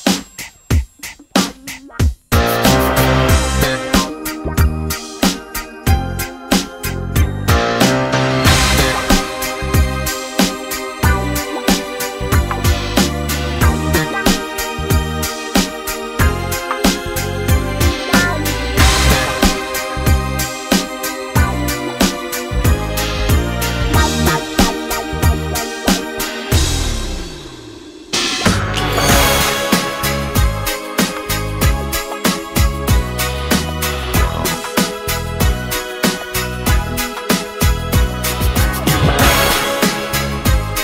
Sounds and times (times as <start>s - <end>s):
Independent music: 0.0s - 40.8s.